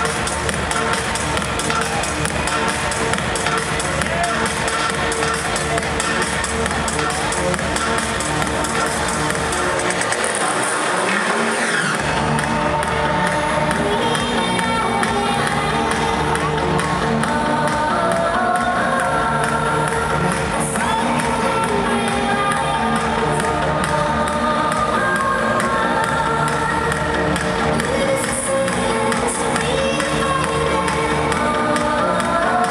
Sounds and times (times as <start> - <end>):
Music: 0.0 - 32.7.